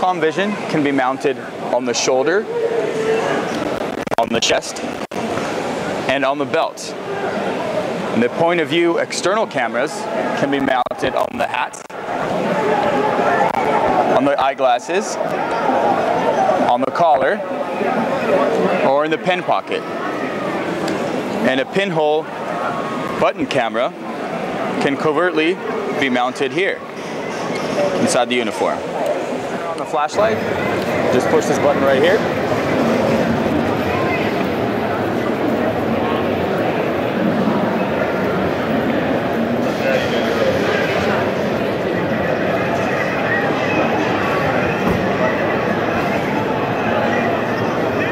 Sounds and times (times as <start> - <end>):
Speech: 0.0 - 3.5, 4.2 - 4.8, 6.1 - 7.0, 8.1 - 11.9, 12.6 - 15.7, 16.4 - 17.5, 18.2 - 19.8, 21.4 - 22.3, 23.1 - 24.0, 24.8 - 26.8, 27.7 - 28.9, 29.6 - 32.3.